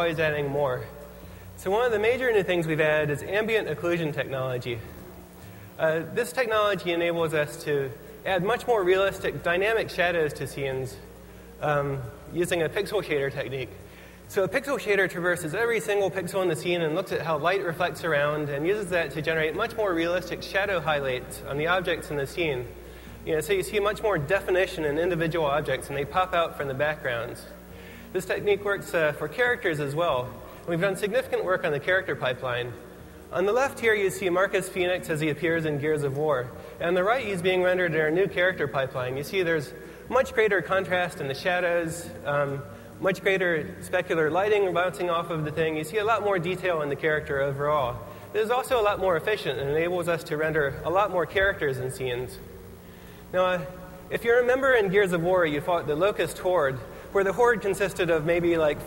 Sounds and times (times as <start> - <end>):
Speech: 0.0 - 1.0, 1.6 - 5.0, 5.8 - 52.5, 53.3 - 58.8.